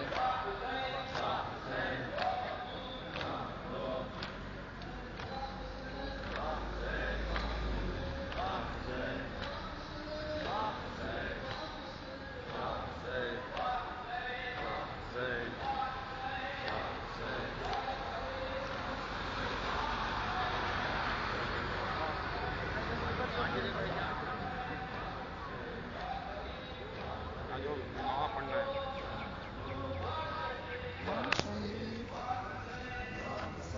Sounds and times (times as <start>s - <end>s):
Outside, urban or manmade: 0.0s - 33.7s
Speech: 8.2s - 33.7s.